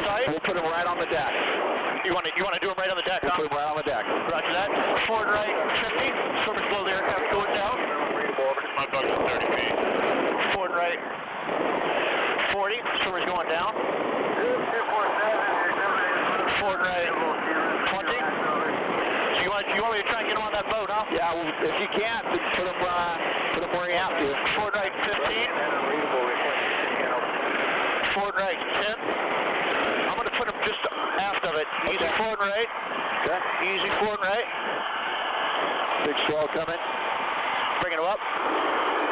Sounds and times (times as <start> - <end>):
Speech: 0.0 - 1.4, 2.0 - 9.8, 10.4 - 11.0, 12.4 - 13.8, 14.4 - 18.8, 19.4 - 27.3, 28.0 - 29.0, 30.1 - 34.5, 36.0 - 36.8, 37.8 - 38.2
Sailboat, sailing ship: 0.0 - 39.1.